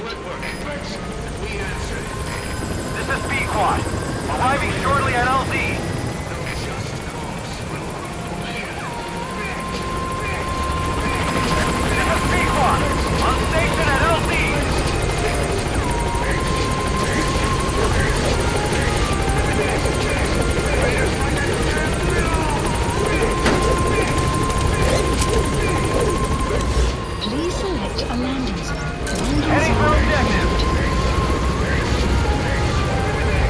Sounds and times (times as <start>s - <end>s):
Music: 0.0s - 33.5s
Speech: 0.0s - 33.5s.